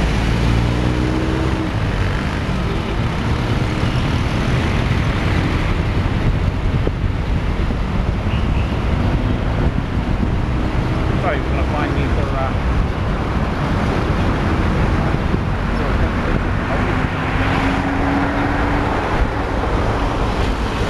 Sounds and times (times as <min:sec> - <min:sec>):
Car: 0:00.0 - 0:20.9
Speech: 0:11.2 - 0:12.6.